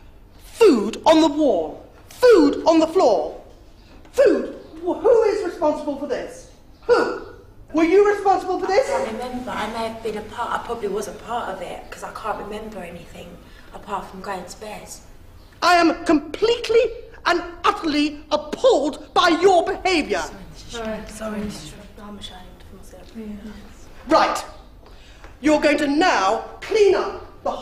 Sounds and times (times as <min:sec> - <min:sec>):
Female speech, woman speaking: 0:08.7 - 0:15.1, 0:19.9 - 0:23.9.